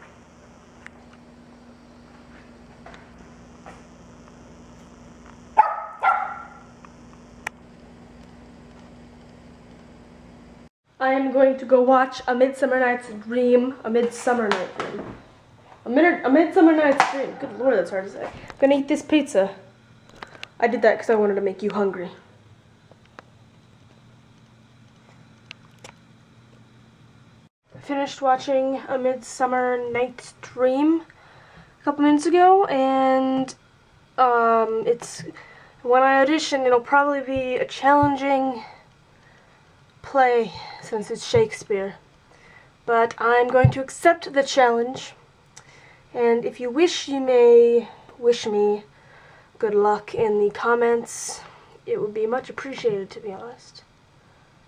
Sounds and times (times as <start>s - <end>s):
Speech: 11.0s - 15.0s, 15.8s - 19.7s, 20.6s - 22.3s, 27.8s - 31.1s, 31.8s - 33.6s, 34.2s - 38.8s, 40.1s - 42.0s, 42.9s - 45.2s, 46.2s - 48.9s, 49.6s - 53.9s.